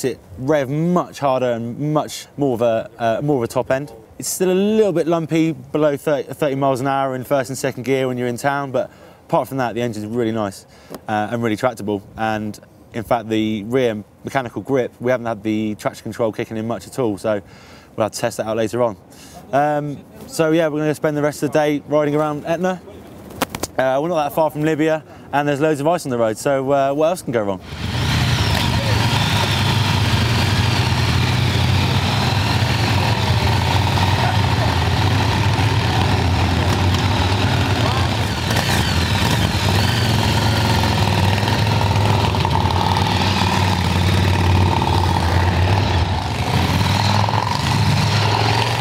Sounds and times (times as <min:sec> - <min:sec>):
Motorcycle: 0:27.6 - 0:48.8.